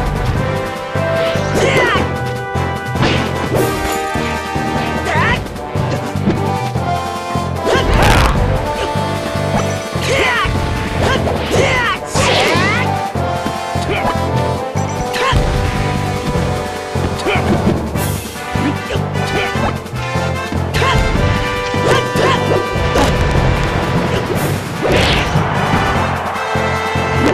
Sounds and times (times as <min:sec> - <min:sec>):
Video game music: 0:00.0 - 0:27.3.